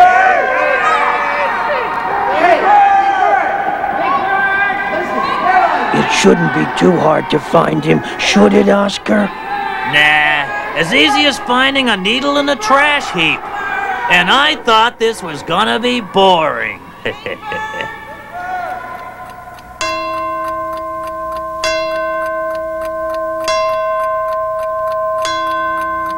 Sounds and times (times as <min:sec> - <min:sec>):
Speech: 0:10.2 - 0:13.4.